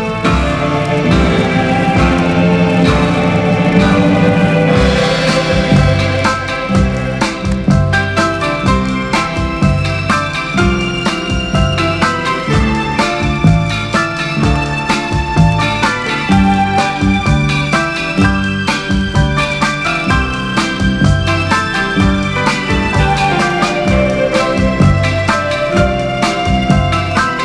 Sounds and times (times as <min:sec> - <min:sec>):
Music: 0:00.0 - 0:27.4.